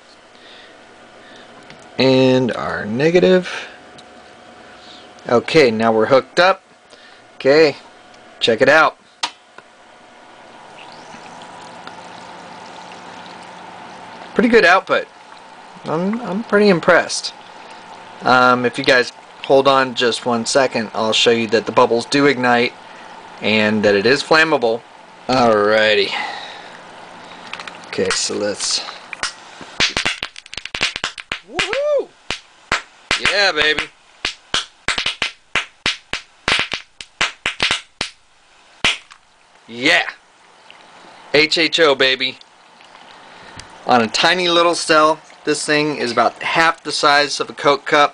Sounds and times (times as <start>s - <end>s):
Speech: 2.0s - 3.7s, 5.2s - 6.6s, 7.4s - 9.0s, 14.4s - 15.1s, 15.8s - 17.4s, 18.2s - 22.8s, 23.4s - 26.2s, 27.9s - 29.0s, 33.2s - 33.9s, 39.7s - 40.2s, 41.3s - 42.4s, 43.9s - 48.1s
Liquid: 9.9s - 31.8s, 38.9s - 48.1s.